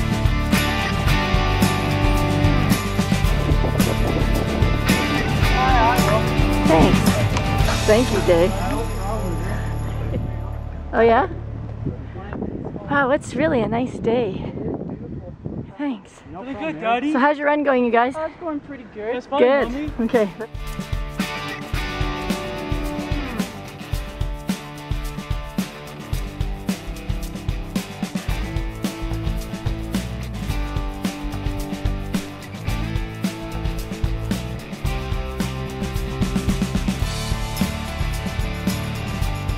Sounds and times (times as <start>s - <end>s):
Music: 0.0s - 12.2s, 19.4s - 39.5s.